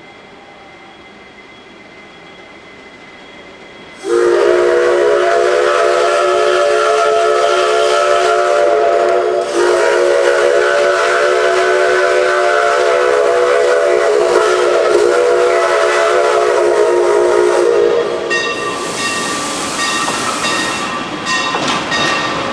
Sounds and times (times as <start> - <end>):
Steam: 0.0 - 22.5
Steam whistle: 4.0 - 21.0.